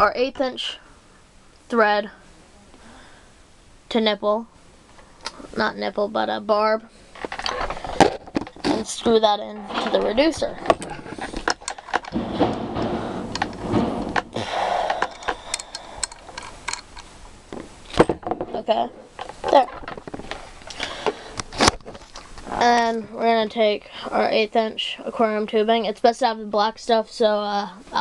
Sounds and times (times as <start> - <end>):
Speech: 0.0 - 0.8, 1.7 - 2.2, 3.9 - 4.5, 5.4 - 6.9, 8.7 - 10.6, 18.5 - 18.9, 19.5 - 19.7, 22.5 - 28.0.